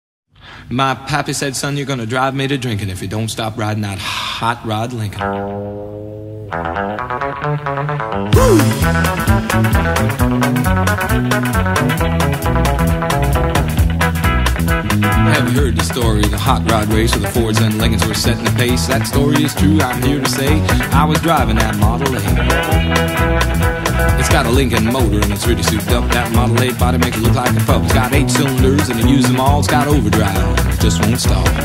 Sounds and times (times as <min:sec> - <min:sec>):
Speech: 0:00.7 - 0:05.3, 0:15.2 - 0:22.4, 0:24.2 - 0:31.6
Music: 0:05.1 - 0:31.6.